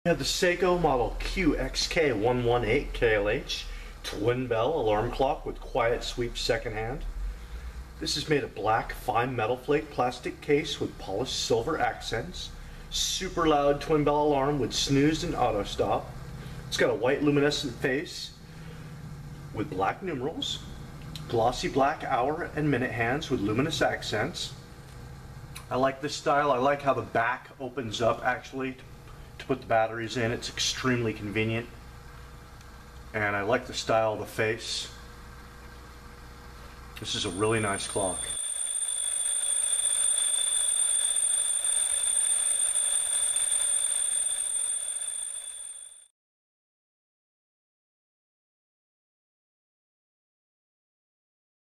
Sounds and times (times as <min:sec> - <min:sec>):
Speech: 0:00.1 - 0:07.1, 0:08.0 - 0:18.4, 0:19.5 - 0:24.6, 0:25.6 - 0:31.8, 0:33.1 - 0:35.0, 0:37.0 - 0:38.4.